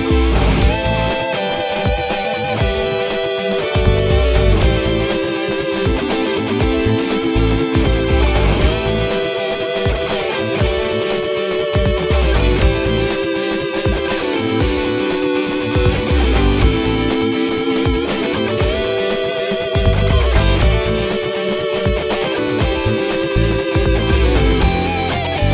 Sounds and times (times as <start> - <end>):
Funk: 0.0 - 25.5.